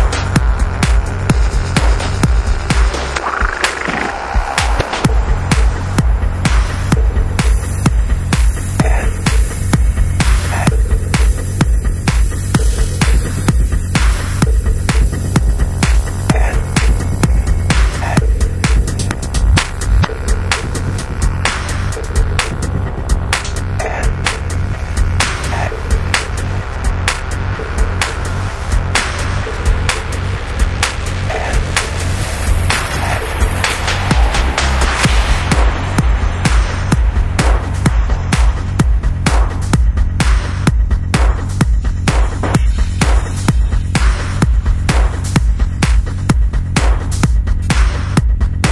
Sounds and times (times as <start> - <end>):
Techno: 0.0 - 48.7.